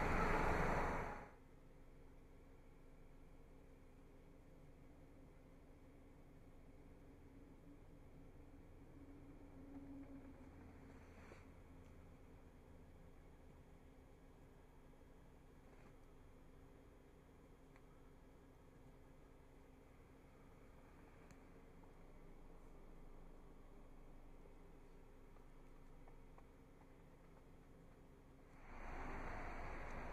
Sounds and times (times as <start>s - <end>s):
Silence: 0.0s - 30.1s.